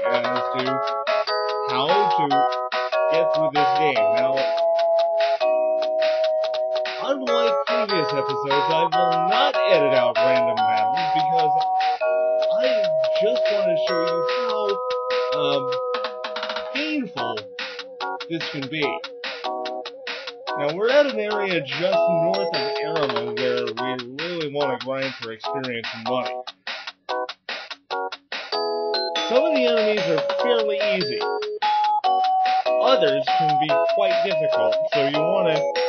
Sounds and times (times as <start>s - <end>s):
Speech: 0.0s - 0.8s, 1.7s - 2.5s, 3.1s - 4.6s, 7.0s - 11.6s, 12.5s - 15.8s, 16.8s - 17.5s, 18.2s - 19.0s, 20.6s - 26.4s, 29.3s - 31.3s, 32.8s - 35.8s
Music: 0.0s - 35.8s.